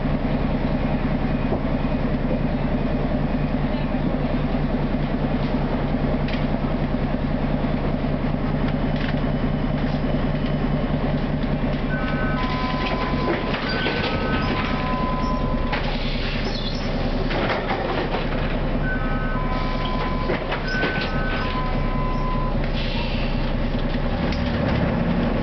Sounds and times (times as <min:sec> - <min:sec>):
Vehicle: 0:00.0 - 0:25.4.